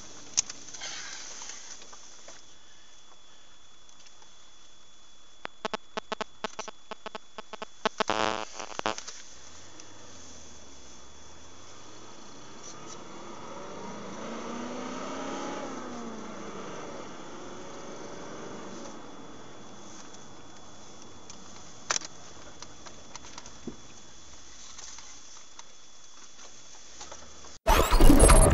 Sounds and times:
Vehicle: 0:09.0 - 0:25.7, 0:26.5 - 0:28.5.

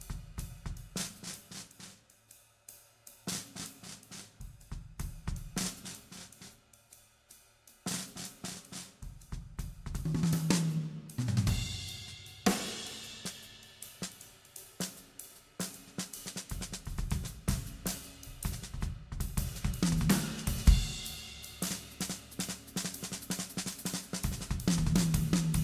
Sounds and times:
Hi-hat: 0:00.0 - 0:25.6.

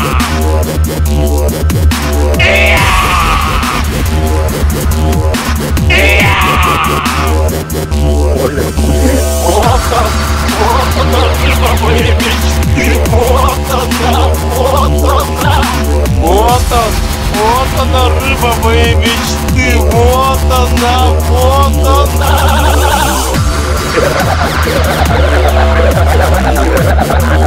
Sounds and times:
Dubstep: 0:00.0 - 0:27.4
Speech: 0:08.3 - 0:22.7.

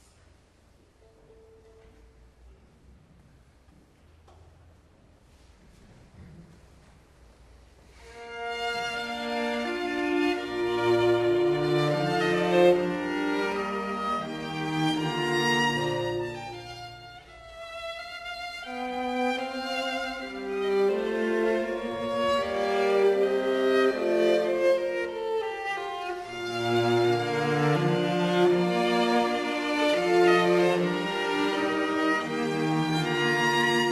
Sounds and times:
Cello: 0:00.0 - 0:33.9
Violin, fiddle: 0:08.0 - 0:33.9.

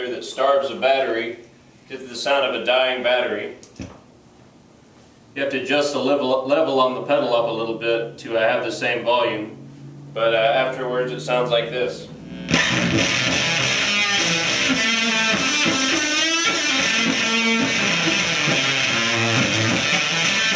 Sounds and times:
Speech: 0:00.0 - 0:03.6, 0:05.4 - 0:09.6, 0:10.2 - 0:12.1
Bass guitar: 0:09.4 - 0:20.5
Electric guitar: 0:12.1 - 0:20.5
Strum: 0:12.1 - 0:20.5.

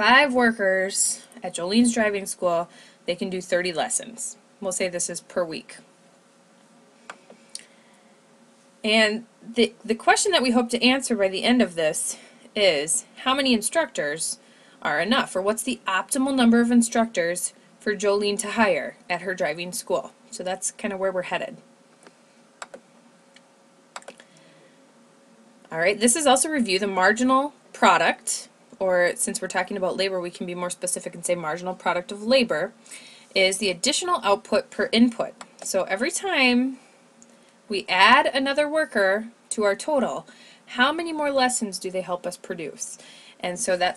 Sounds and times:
Computer keyboard: 0:22.6 - 0:22.8, 0:24.0 - 0:24.2.

